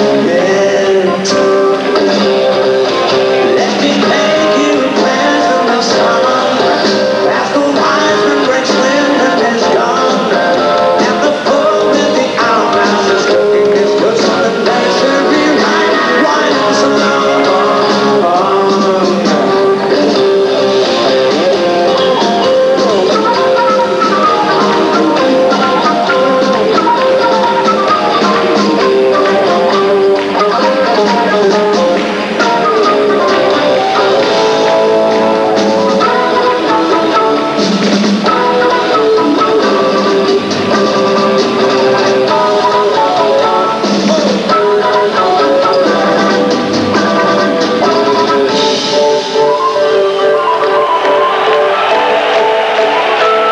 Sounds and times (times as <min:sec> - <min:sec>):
Progressive rock: 0:00.0 - 0:53.5
Rock and roll: 0:00.0 - 0:53.5.